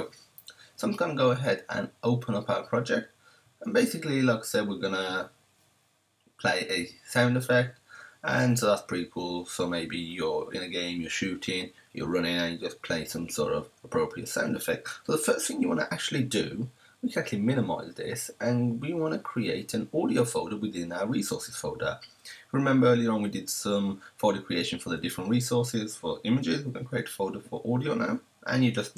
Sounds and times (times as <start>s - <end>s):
Speech: 0.0s - 5.3s, 6.4s - 28.9s.